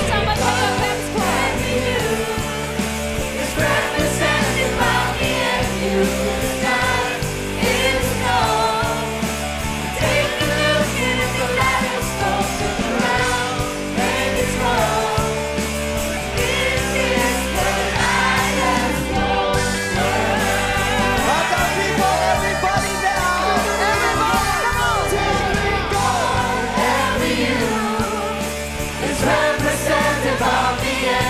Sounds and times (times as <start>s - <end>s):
Singing: 0.0s - 9.2s, 16.3s - 31.3s
Vocal music: 0.0s - 31.3s.